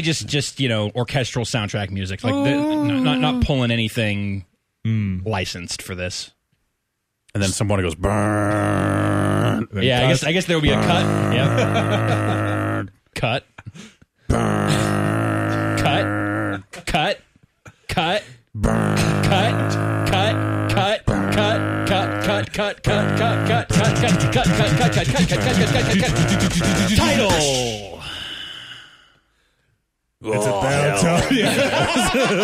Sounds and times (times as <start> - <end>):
Speech: 0.0 - 6.4, 7.3 - 8.1, 9.7 - 11.6, 15.7 - 17.2, 19.0 - 28.0, 30.2 - 32.4.